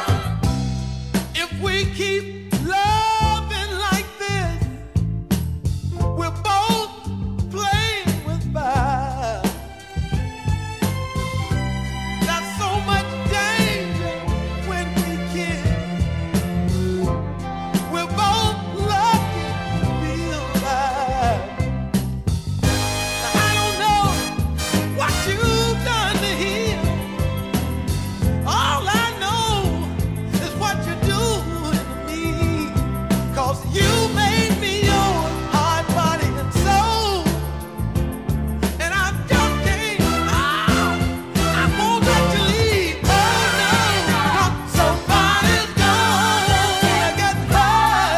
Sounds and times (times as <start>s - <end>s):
Music: 0.0s - 48.1s.